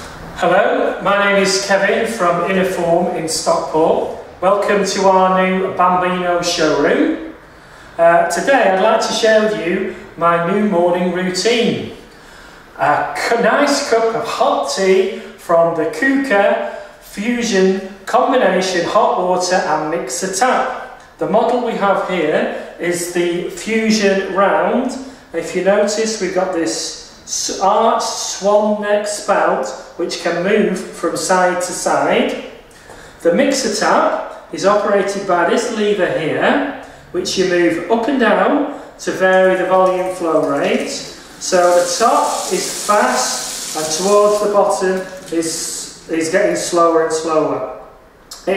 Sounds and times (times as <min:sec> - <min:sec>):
Speech: 0:00.4 - 0:07.4, 0:08.0 - 0:12.1, 0:12.8 - 0:32.6, 0:33.2 - 0:48.5.